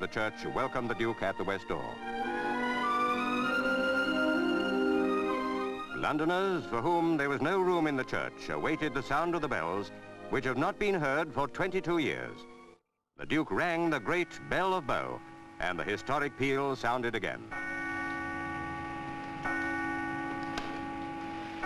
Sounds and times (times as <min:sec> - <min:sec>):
Speech: 0:00.0 - 0:02.0, 0:06.0 - 0:12.4, 0:13.2 - 0:17.5
Music: 0:00.0 - 0:12.8, 0:13.4 - 0:21.6.